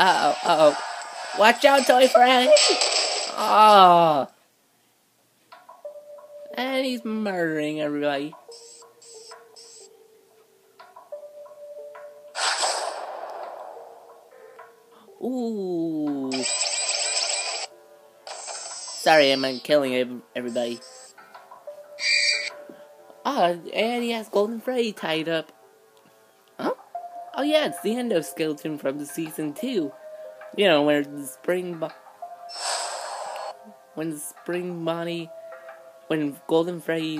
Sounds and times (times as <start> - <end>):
Music: 0.0 - 4.3, 5.4 - 37.1.